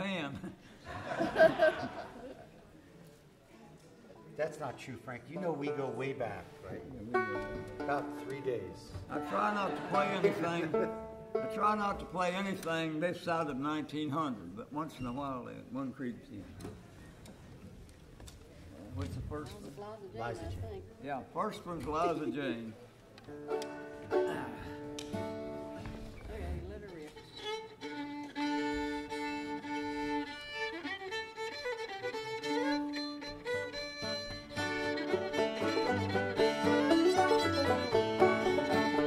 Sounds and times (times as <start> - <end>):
Violin, fiddle: 25.0 - 39.0.